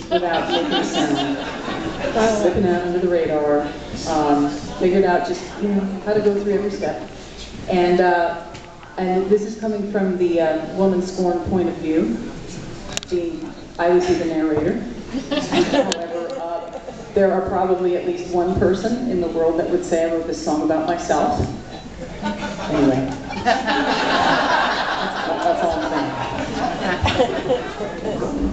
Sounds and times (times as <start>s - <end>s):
Speech: 2.1s - 7.1s, 15.9s - 21.5s.